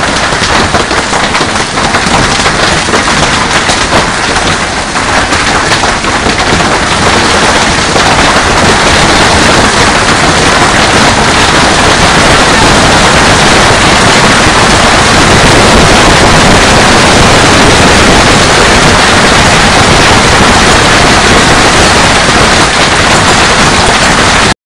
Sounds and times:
Rain: 0.0s - 24.6s.

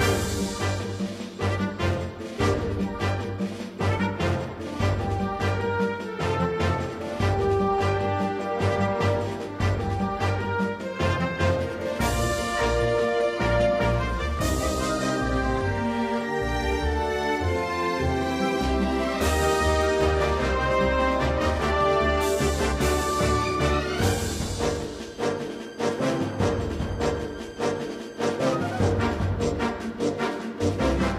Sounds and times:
Music: 0.0s - 31.1s.

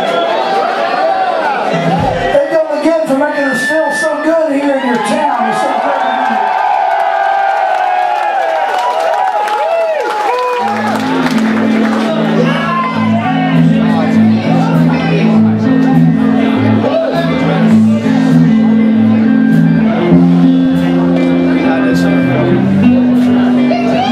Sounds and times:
Speech: 1.7s - 6.4s.

